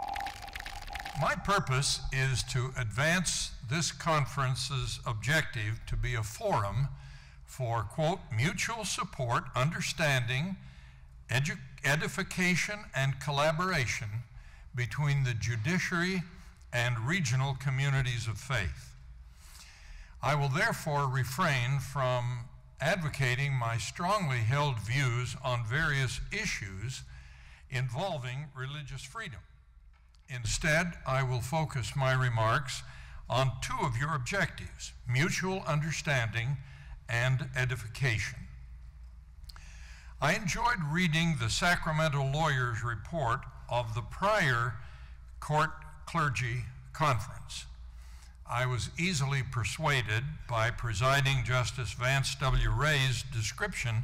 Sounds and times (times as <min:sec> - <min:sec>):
Narration, monologue: 0:00.0 - 0:54.0
Male speech, man speaking: 0:01.2 - 0:10.6, 0:11.3 - 0:19.0, 0:20.2 - 0:27.1, 0:27.7 - 0:29.4, 0:30.3 - 0:38.5, 0:40.2 - 0:44.8, 0:45.4 - 0:47.7, 0:48.5 - 0:54.0.